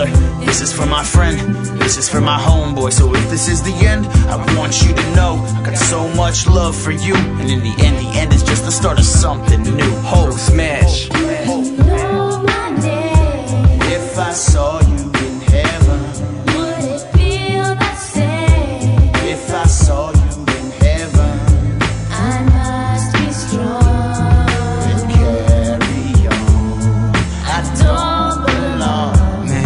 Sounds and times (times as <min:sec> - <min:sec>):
Soul music: 0:00.0 - 0:29.6.